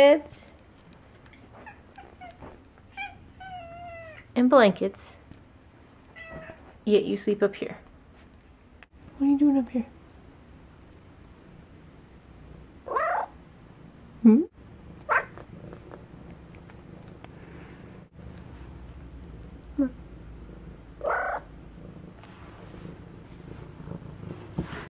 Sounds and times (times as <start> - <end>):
Purr: 14.8 - 24.9.